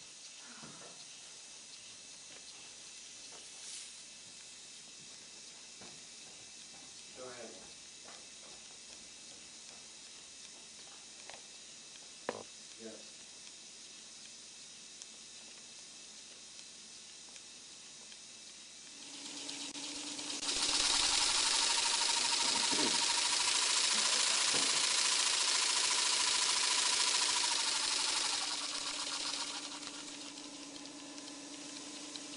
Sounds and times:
Speech: 7.2 - 7.7, 12.8 - 13.1
Engine: 18.1 - 32.3.

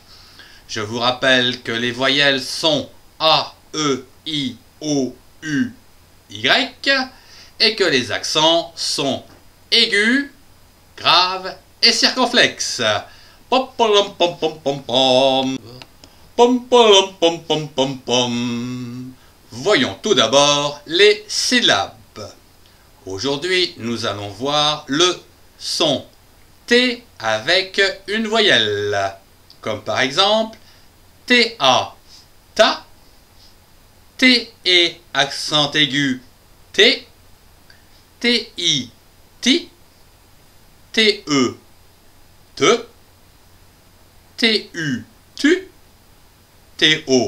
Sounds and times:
Speech: 0.7 - 10.4, 11.0 - 15.8, 16.4 - 22.4, 23.0 - 26.1, 26.7 - 30.6, 31.3 - 32.0, 32.6 - 32.9, 34.2 - 37.1, 38.2 - 39.8, 40.9 - 41.6, 42.6 - 43.0, 44.4 - 45.7, 46.8 - 47.2.

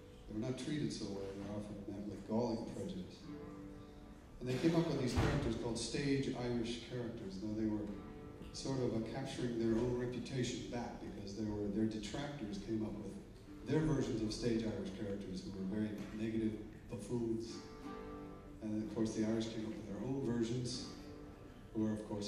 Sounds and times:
Music: 0.0 - 22.2
Speech: 0.2 - 3.3, 4.4 - 17.7, 18.6 - 21.0, 21.7 - 22.2.

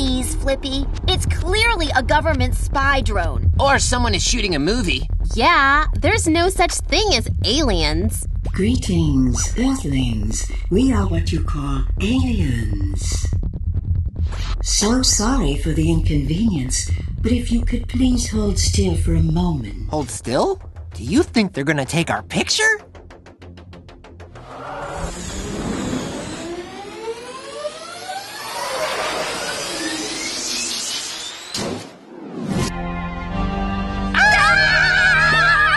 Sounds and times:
Speech: 0.0 - 13.3, 14.7 - 22.8.

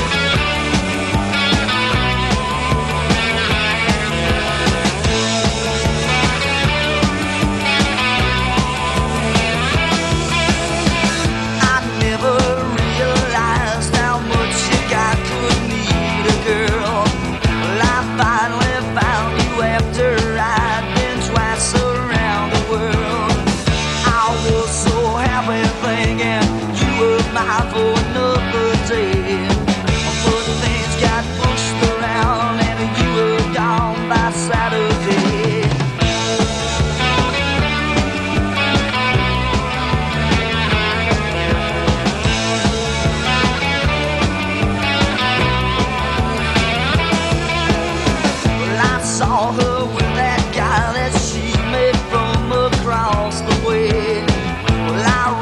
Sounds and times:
Music: 0.0 - 55.4.

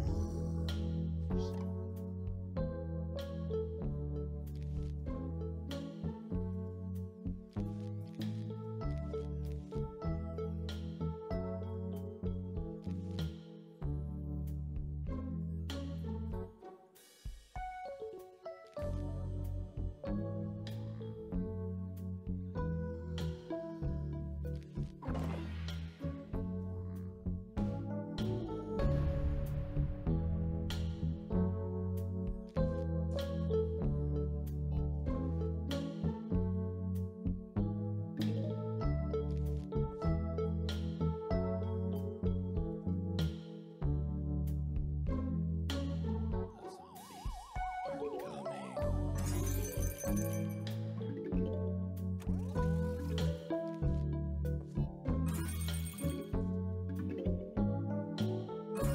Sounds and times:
Music: 0.0 - 58.9.

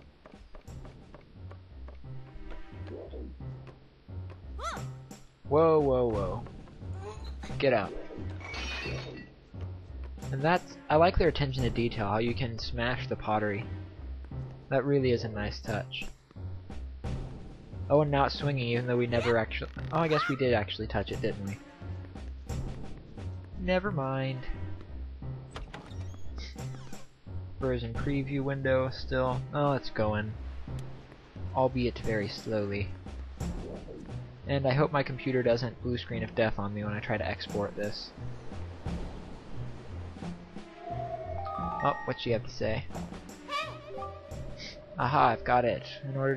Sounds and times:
Speech: 5.5 - 8.0, 10.3 - 13.7, 14.7 - 16.1, 17.9 - 21.6, 23.6 - 24.6, 27.6 - 30.4, 31.6 - 32.9, 34.5 - 38.1, 41.8 - 42.9, 44.6 - 46.3.

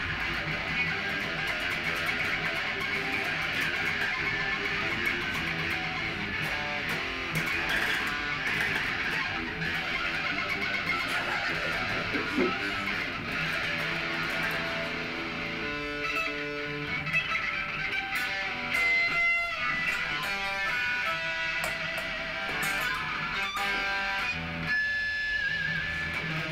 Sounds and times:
Strum: 0.0 - 16.9
Electric guitar: 0.0 - 26.5.

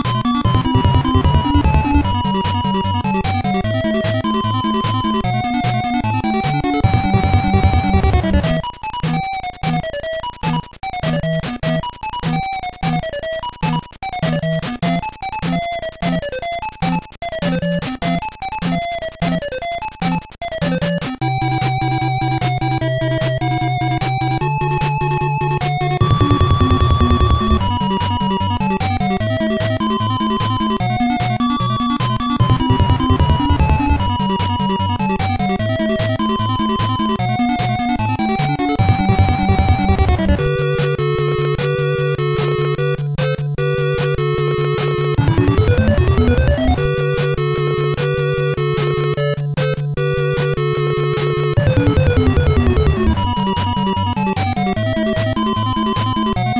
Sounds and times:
Music: 0.0 - 56.5.

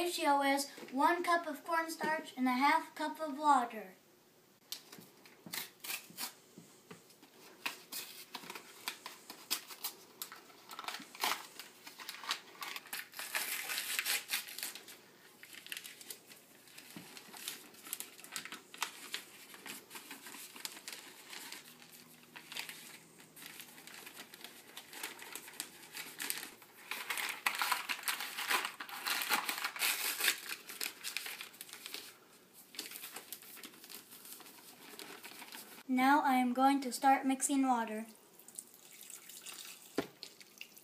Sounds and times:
Speech: 0.0 - 4.0, 35.9 - 38.2.

